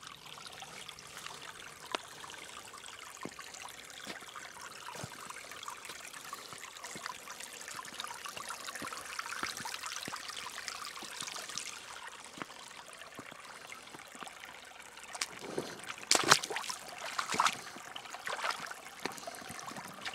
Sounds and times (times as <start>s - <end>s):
Stream: 0.0s - 20.1s.